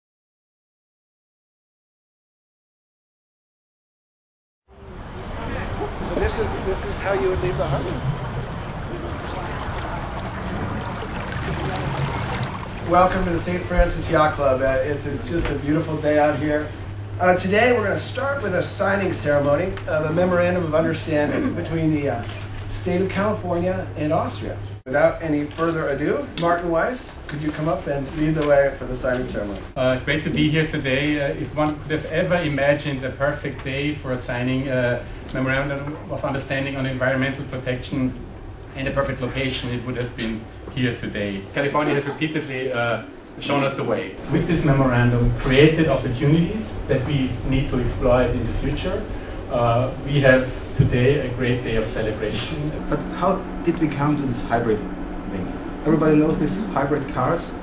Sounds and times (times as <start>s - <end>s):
Speech: 5.4s - 8.1s, 12.9s - 57.6s.